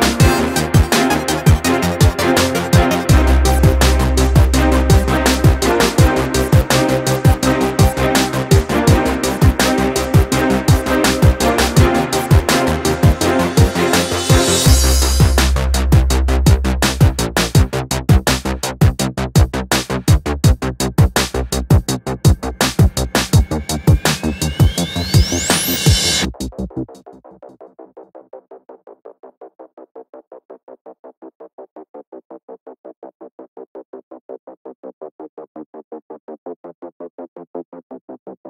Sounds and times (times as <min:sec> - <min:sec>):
Drum machine: 0:00.0 - 0:26.6.